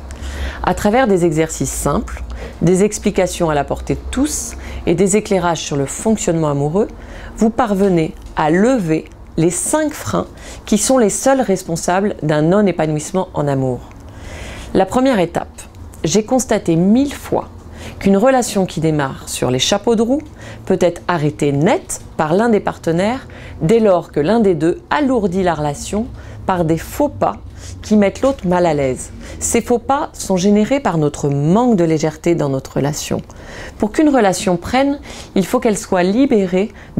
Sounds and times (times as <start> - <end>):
Speech: 0.6 - 14.0, 14.8 - 36.9.